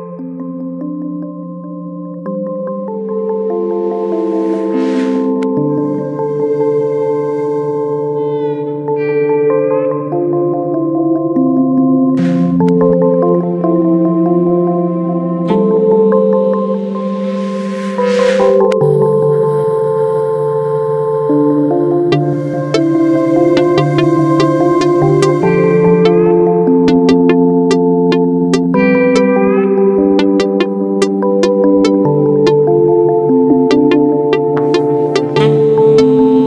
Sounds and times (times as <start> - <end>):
Ambient music: 0.0 - 36.4
Trance music: 2.8 - 9.0, 12.2 - 14.0, 14.9 - 19.5, 22.1 - 36.4.